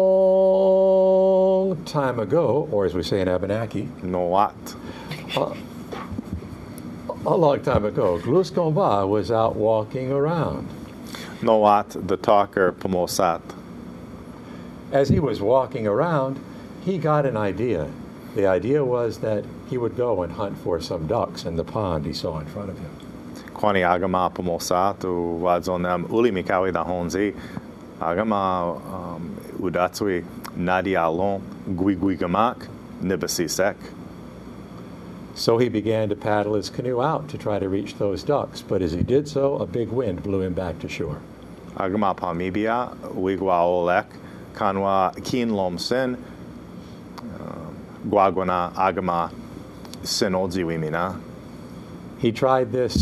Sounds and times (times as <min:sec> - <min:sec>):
Speech: 0:01.4 - 0:05.7, 0:07.1 - 0:10.7, 0:11.4 - 0:13.6, 0:14.9 - 0:23.0, 0:23.6 - 0:27.4, 0:28.0 - 0:34.0, 0:35.4 - 0:46.2, 0:47.2 - 0:49.4, 0:50.0 - 0:51.2, 0:52.2 - 0:53.0.